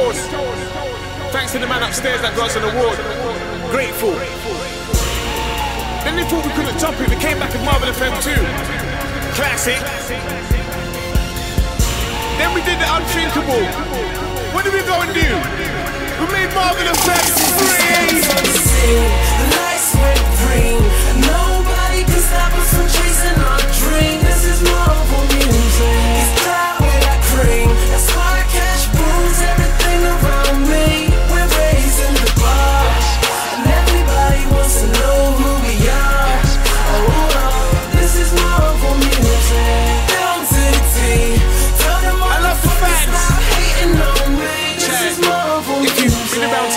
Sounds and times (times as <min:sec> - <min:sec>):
Dance music: 0:00.0 - 0:46.7
Pop music: 0:00.0 - 0:46.7.